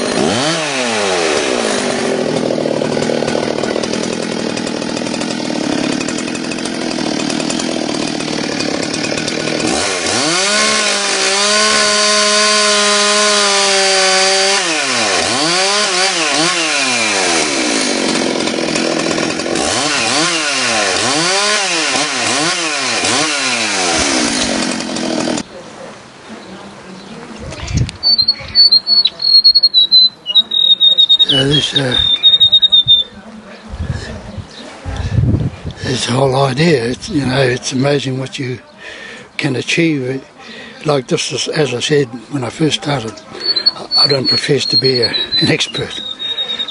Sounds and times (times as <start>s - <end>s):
Chainsaw: 0.0s - 25.5s, 28.0s - 33.1s, 35.8s - 40.8s, 41.4s - 46.7s
Squawk: 27.6s - 33.1s, 43.5s - 46.7s
Speech: 29.8s - 32.1s, 35.8s - 46.4s.